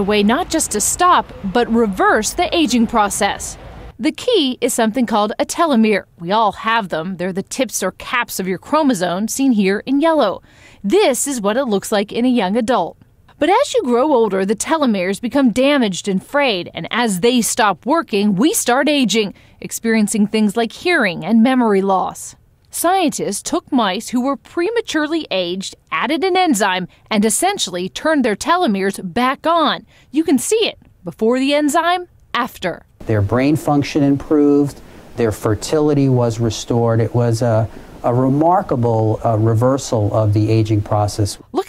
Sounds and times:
Speech: 0.0 - 41.6.

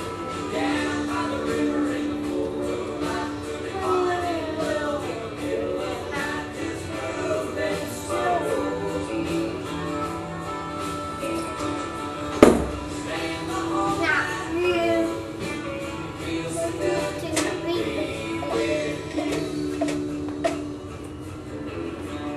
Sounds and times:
Male singing: 0.0 - 10.3, 12.8 - 20.6
Music: 0.0 - 22.3.

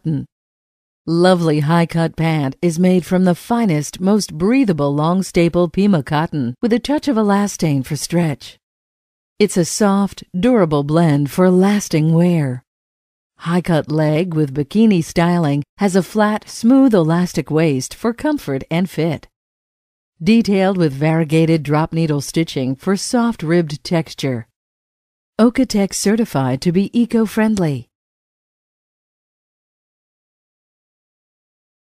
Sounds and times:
Speech: 0.0 - 0.3, 1.1 - 8.6, 9.4 - 12.6, 13.4 - 19.3, 20.2 - 24.5, 25.4 - 27.9.

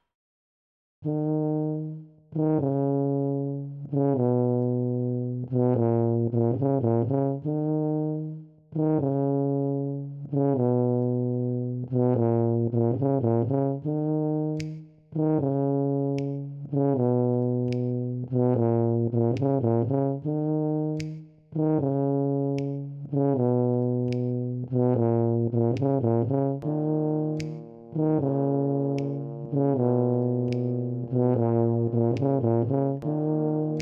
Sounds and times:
Trombone: 1.1 - 33.8.

